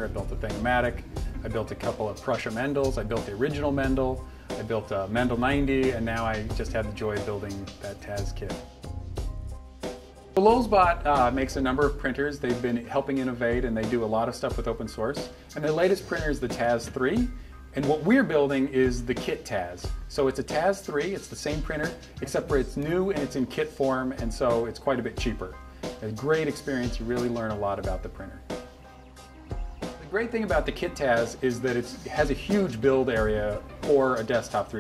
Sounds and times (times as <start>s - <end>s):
Speech: 0.0s - 8.6s, 10.4s - 28.4s, 30.0s - 34.8s
Music: 0.0s - 34.8s.